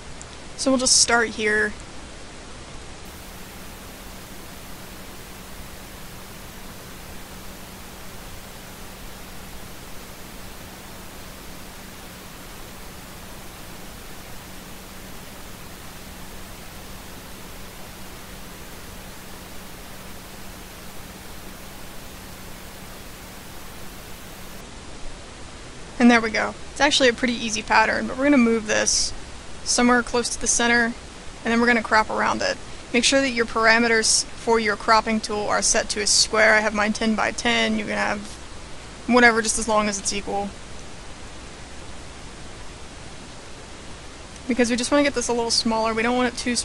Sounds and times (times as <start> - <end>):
Speech: 0.6 - 1.8, 26.0 - 38.4, 39.1 - 40.6, 44.4 - 46.6.